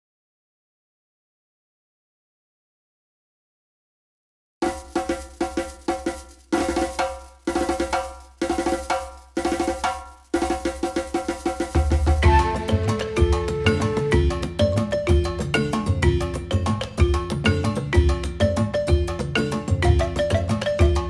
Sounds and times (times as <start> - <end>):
Music: 4.6 - 21.0.